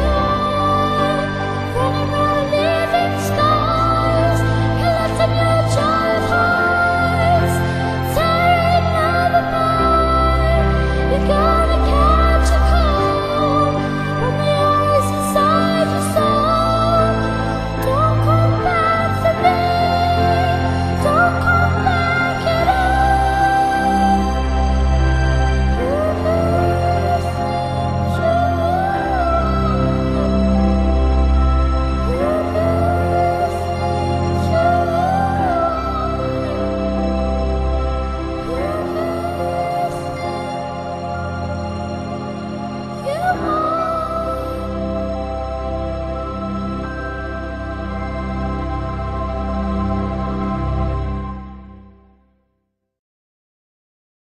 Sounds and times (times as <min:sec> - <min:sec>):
Singing: 0:00.0 - 0:24.9, 0:25.6 - 0:30.9, 0:31.9 - 0:37.0, 0:43.0 - 0:45.4
Background music: 0:00.0 - 0:52.4.